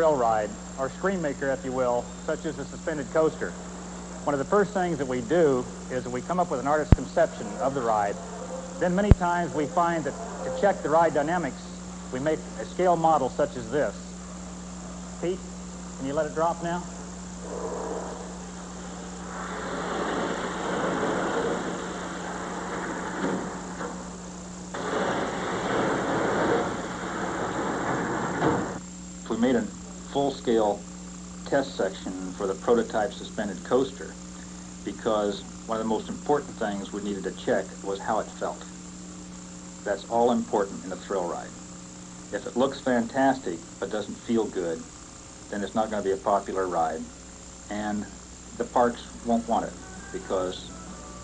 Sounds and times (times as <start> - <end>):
Speech: 0.0 - 3.6, 4.2 - 8.2, 8.8 - 14.1, 15.2 - 16.9, 29.3 - 30.8, 31.4 - 34.2, 34.8 - 38.7, 39.9 - 41.6, 42.3 - 44.9, 45.5 - 47.1, 47.7 - 50.7.